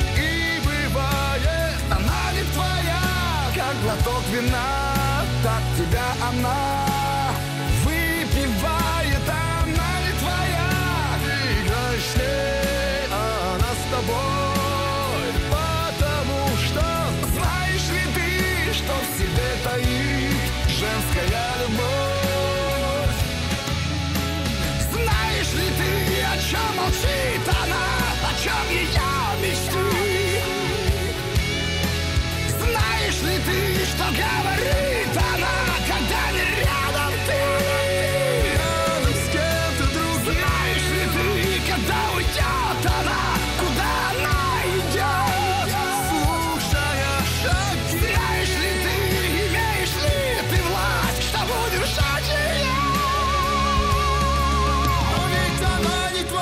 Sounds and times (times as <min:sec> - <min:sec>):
Progressive rock: 0:00.0 - 0:56.4.